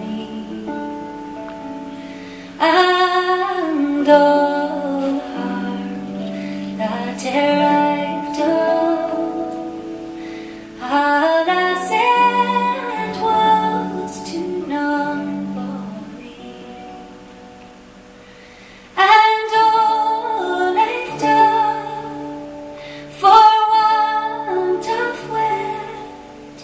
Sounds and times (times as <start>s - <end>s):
Music: 0.0s - 26.6s.